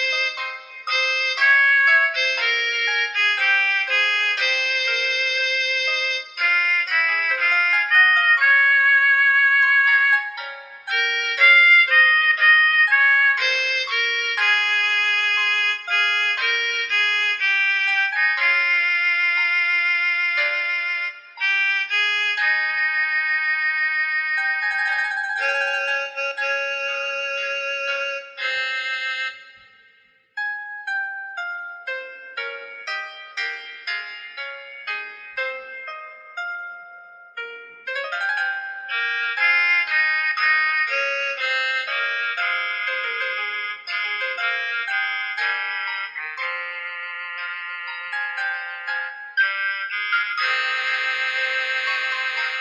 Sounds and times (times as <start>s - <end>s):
Piano: 0.0s - 29.4s, 30.4s - 52.6s
Classical music: 0.0s - 52.6s.